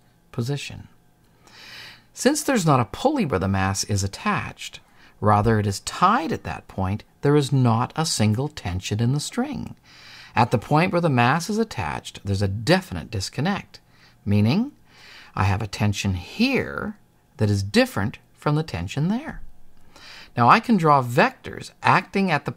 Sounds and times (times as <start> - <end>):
Speech: 0.3 - 1.0, 2.2 - 9.8, 10.4 - 14.8, 15.4 - 19.5, 20.4 - 22.5.